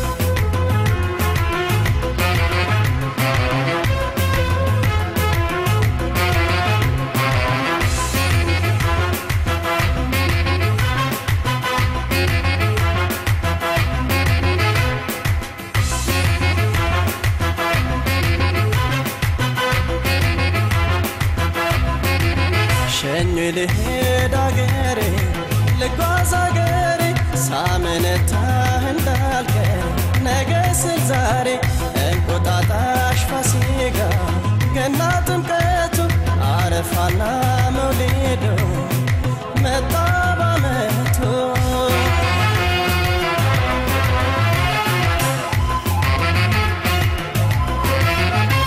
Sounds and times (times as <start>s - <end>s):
Music of Bollywood: 0.0s - 48.6s.